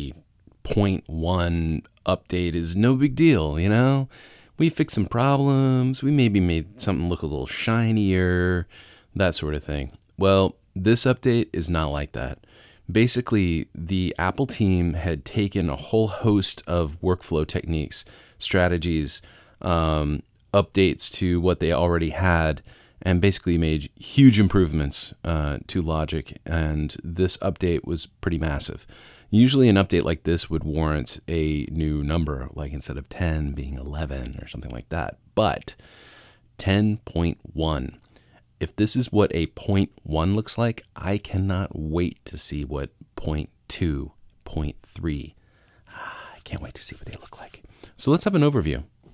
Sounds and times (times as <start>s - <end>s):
Speech: 0.0s - 35.8s, 36.6s - 38.0s, 38.6s - 48.9s.